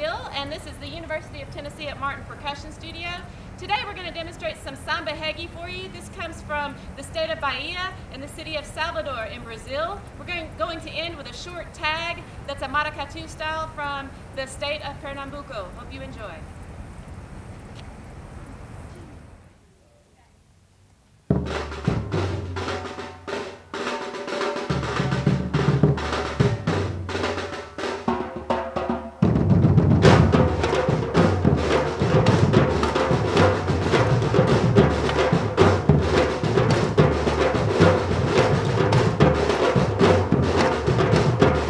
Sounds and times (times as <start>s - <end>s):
Drum roll: 21.3s - 41.7s.